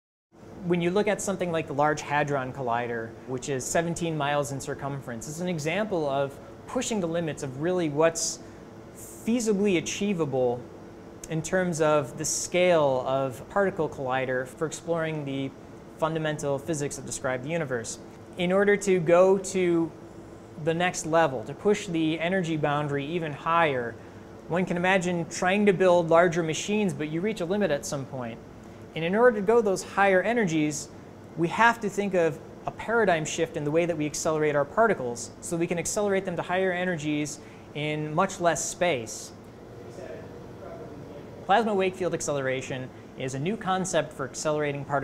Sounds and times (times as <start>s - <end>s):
Speech: 0.6s - 8.4s, 9.0s - 10.7s, 11.3s - 20.0s, 20.6s - 28.4s, 29.0s - 45.0s.